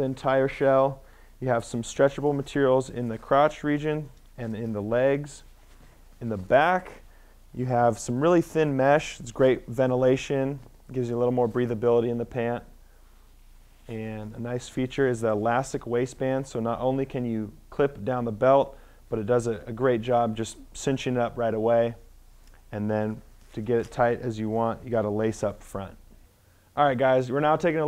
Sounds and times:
Speech: 0.0s - 5.5s, 6.2s - 7.0s, 7.6s - 12.7s, 13.9s - 22.1s, 22.7s - 26.0s, 26.8s - 27.8s.

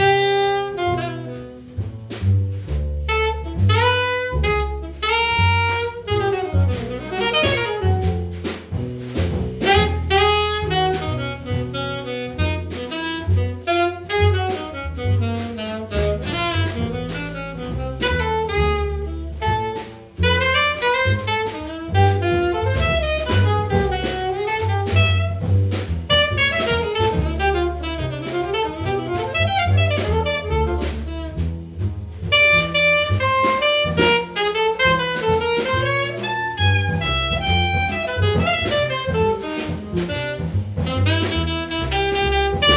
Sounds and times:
Saxophone: 0.0s - 1.7s, 3.0s - 8.4s, 9.6s - 31.5s, 32.3s - 42.7s
Jazz: 0.0s - 42.7s.

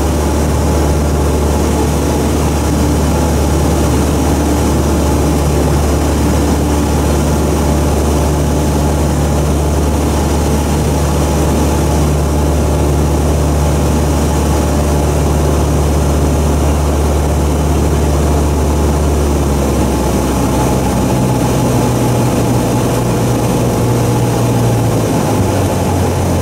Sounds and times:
Propeller, airscrew: 0.0s - 26.4s.

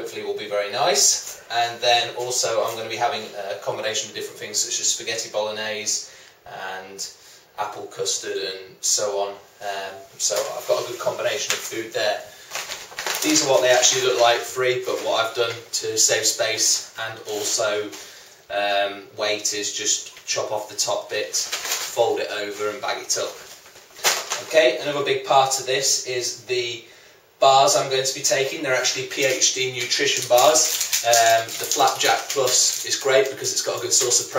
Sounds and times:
Speech: 0.0s - 12.4s, 13.2s - 23.5s, 24.3s - 34.3s
Inside, small room: 0.0s - 34.3s.

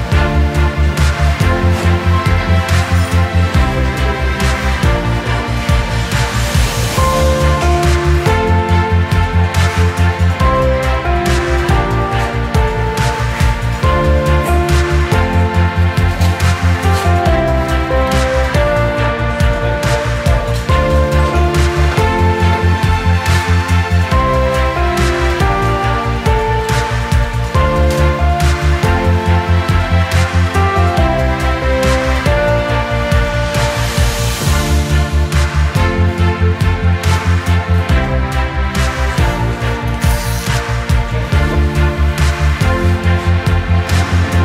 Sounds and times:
Music: 0.0s - 44.4s.

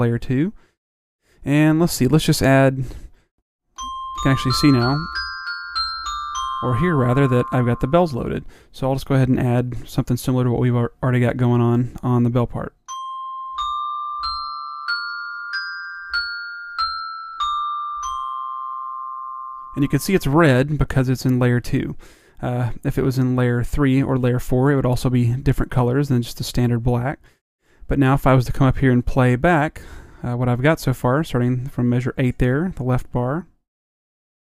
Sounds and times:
Marimba, xylophone: 3.8s - 8.1s, 12.9s - 20.4s
Glockenspiel: 3.8s - 8.3s, 12.9s - 20.7s.

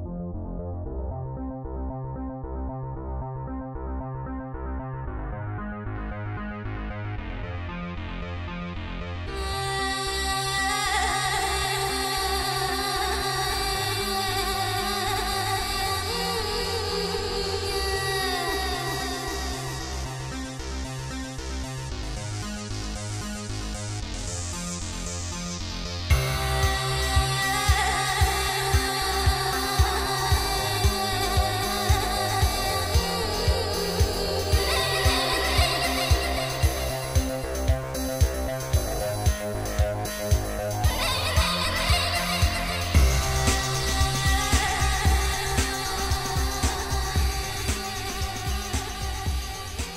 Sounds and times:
Music: 0.0s - 49.9s.

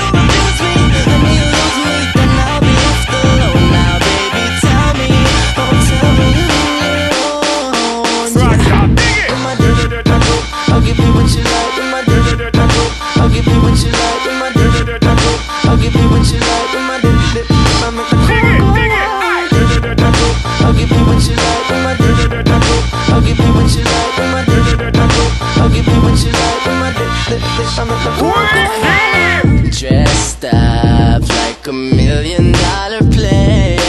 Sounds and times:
Music: 0.0s - 33.8s.

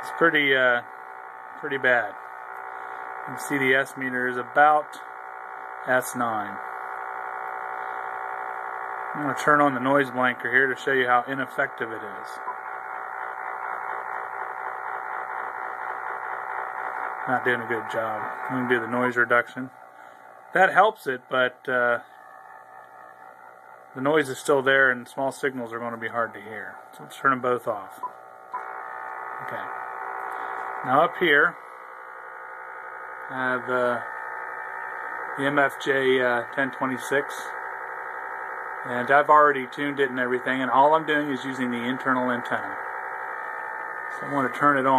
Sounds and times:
Speech: 0.0s - 0.9s, 1.6s - 2.2s, 3.3s - 5.0s, 5.9s - 6.6s, 9.2s - 12.4s, 17.3s - 19.7s, 20.6s - 22.0s, 24.0s - 28.0s, 29.4s - 29.7s, 30.8s - 31.6s, 33.3s - 34.1s, 35.4s - 37.6s, 38.9s - 42.8s, 44.2s - 44.9s.

